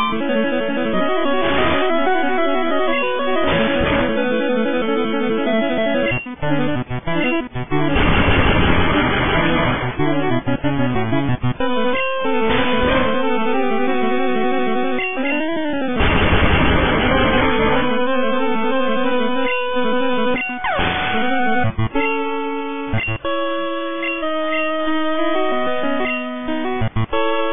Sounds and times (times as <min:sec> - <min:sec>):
Music: 0:00.0 - 0:27.5
Cacophony: 0:07.8 - 0:10.0, 0:16.0 - 0:17.5.